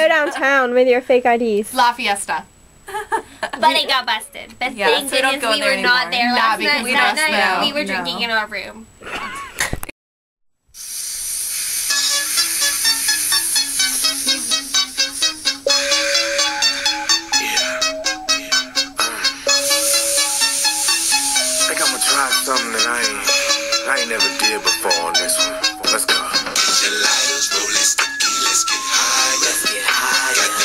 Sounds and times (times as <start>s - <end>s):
Inside, small room: 10.8s - 30.6s
Music: 11.9s - 30.6s.